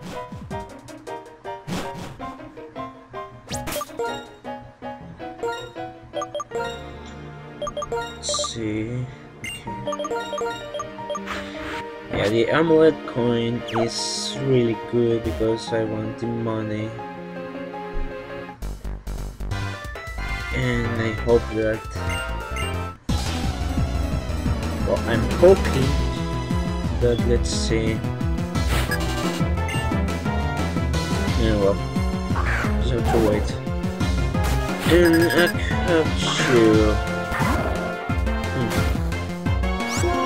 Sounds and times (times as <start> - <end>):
Music: 0.0 - 40.2
Speech: 8.3 - 9.1, 12.1 - 17.0, 20.5 - 21.9, 24.9 - 26.0, 27.0 - 28.0, 31.4 - 31.8, 32.8 - 33.6, 34.8 - 37.9, 39.9 - 40.2.